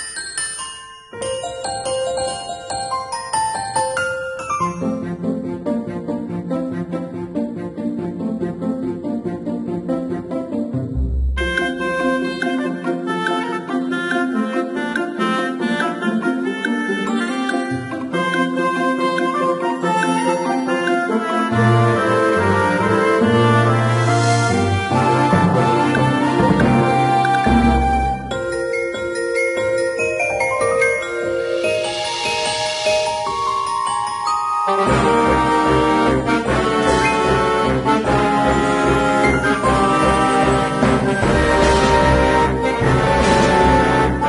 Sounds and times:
Music: 0:00.0 - 0:44.2.

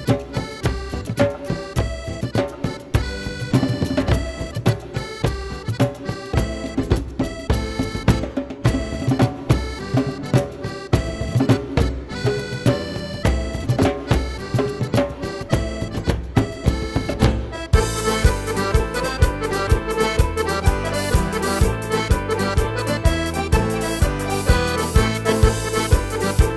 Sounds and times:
Folk music: 0:00.0 - 0:26.5.

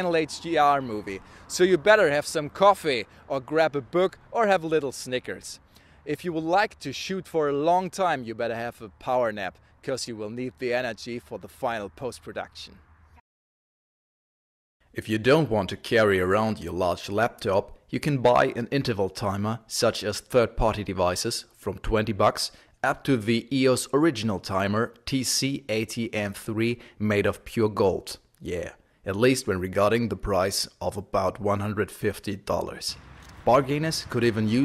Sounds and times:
Speech: 0:00.0 - 0:12.8, 0:15.0 - 0:34.6
Outside, rural or natural: 0:00.0 - 0:13.2, 0:27.7 - 0:34.6.

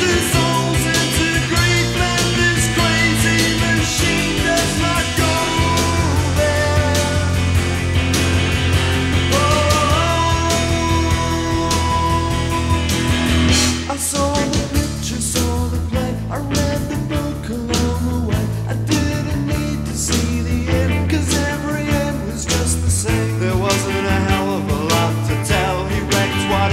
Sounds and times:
Singing: 0:00.0 - 0:07.5, 0:09.3 - 0:12.9, 0:13.9 - 0:26.7
Psychedelic rock: 0:00.0 - 0:26.7.

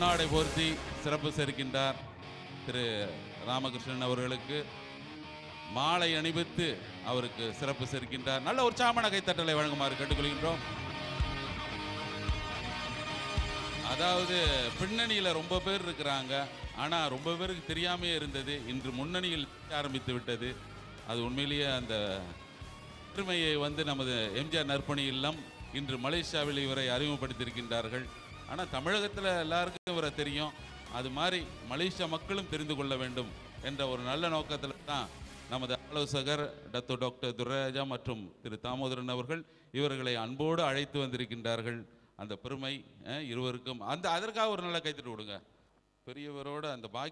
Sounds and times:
Male speech, man speaking: 0:00.0 - 0:02.0, 0:02.6 - 0:04.8, 0:05.7 - 0:10.7, 0:13.8 - 0:22.4, 0:23.2 - 0:45.4, 0:46.1 - 0:47.1
Music: 0:00.0 - 0:46.0
Narration, monologue: 0:00.0 - 0:47.1.

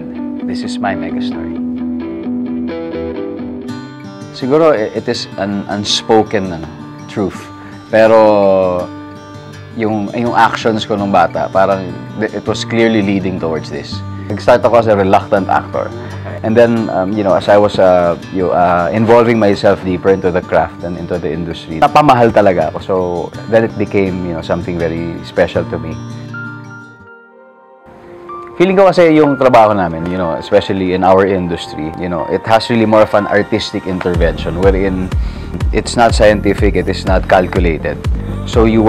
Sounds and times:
Speech: 0:00.0 - 0:01.6, 0:04.4 - 0:08.9, 0:09.8 - 0:26.0, 0:28.6 - 0:38.8
Music: 0:00.0 - 0:38.8.

